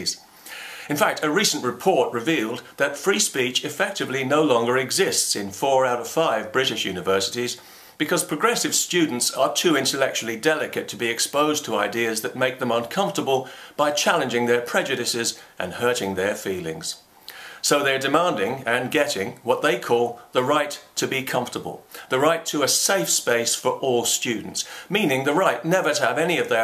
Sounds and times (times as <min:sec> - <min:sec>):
Male speech, man speaking: 0:00.0 - 0:00.2, 0:00.9 - 0:17.0, 0:17.6 - 0:26.6
Narration, monologue: 0:00.0 - 0:26.6.